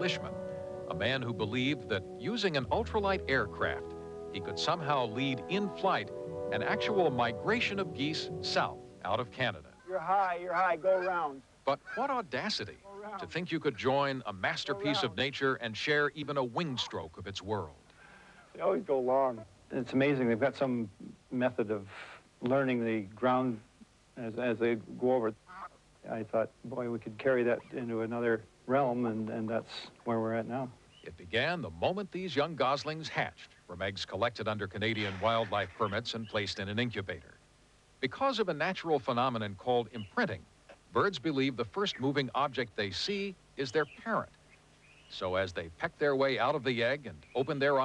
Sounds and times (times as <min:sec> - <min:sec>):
Speech: 0:00.0 - 0:17.8, 0:18.6 - 0:25.4, 0:26.0 - 0:37.4, 0:38.0 - 0:44.3, 0:45.1 - 0:47.8
Honk: 0:25.5 - 0:25.8.